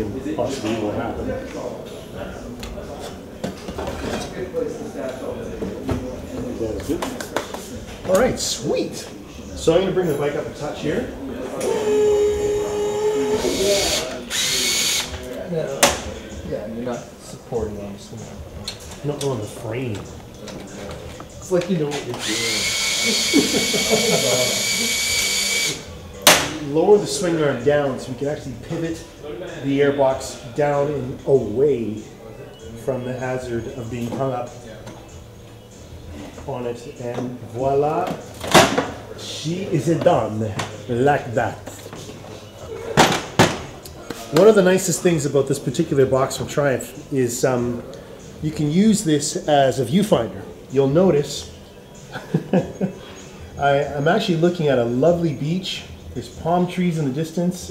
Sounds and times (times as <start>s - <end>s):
Speech: 0.0s - 12.0s, 12.6s - 22.7s, 26.5s - 35.1s, 36.4s - 38.2s, 39.1s - 41.7s, 43.9s - 51.5s, 53.6s - 57.7s.